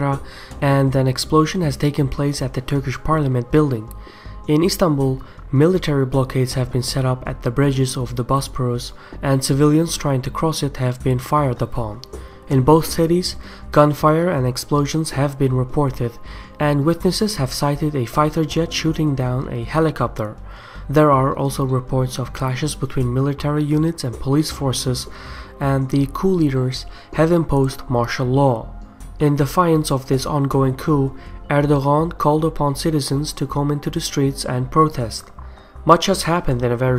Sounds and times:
Speech: 0.0 - 35.3, 35.9 - 36.9.

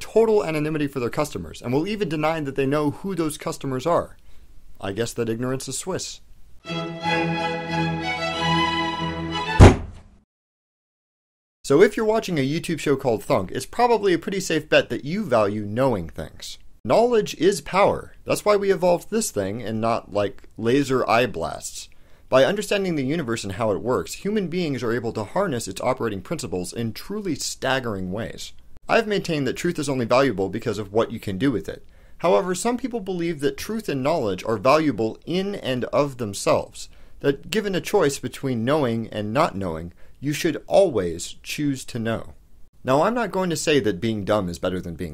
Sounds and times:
Speech: 0.0 - 4.2, 4.8 - 6.3, 11.7 - 45.1
Music: 6.6 - 9.8
Thunk: 9.6 - 10.2.

